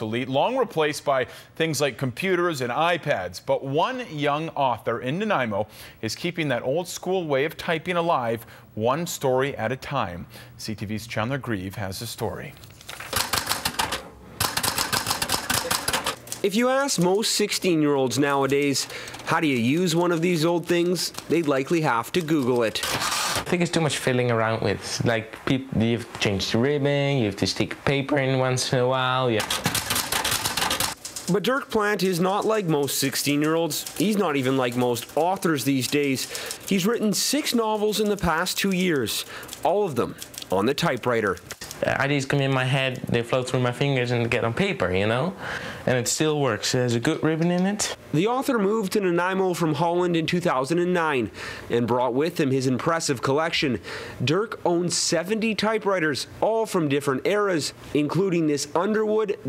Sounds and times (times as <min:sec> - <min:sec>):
Speech: 0:00.0 - 0:12.6, 0:16.4 - 0:22.9, 0:23.5 - 0:29.5, 0:31.3 - 0:59.4
Typewriter: 0:12.9 - 0:16.5, 0:22.2 - 0:23.5, 0:29.4 - 0:31.4, 0:32.4 - 0:41.8.